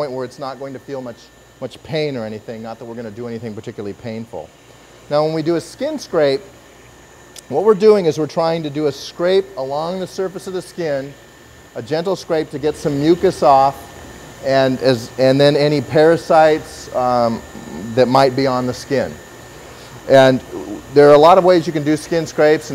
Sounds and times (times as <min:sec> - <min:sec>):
Speech: 0:00.0 - 0:06.5, 0:07.4 - 0:11.2, 0:11.8 - 0:19.2, 0:20.1 - 0:22.7.